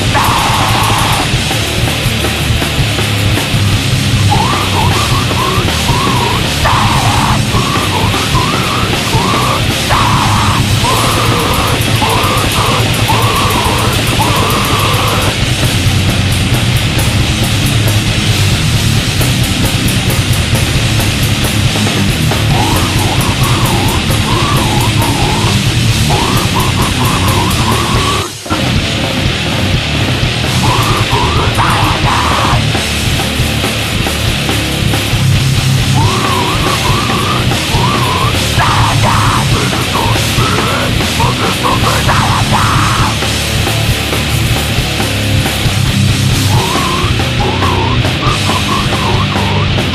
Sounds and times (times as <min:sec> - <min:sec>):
Music: 0:00.0 - 0:49.9.